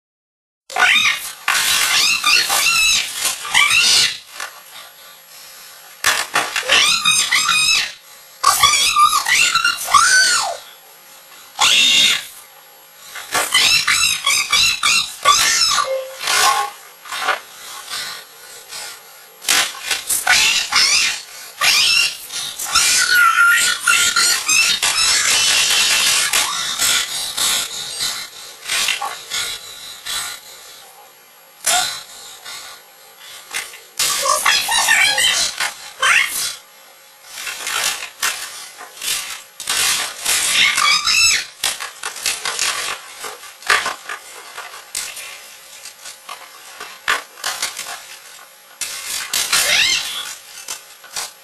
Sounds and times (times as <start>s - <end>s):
Speech: 6.6s - 10.8s, 34.0s - 36.6s.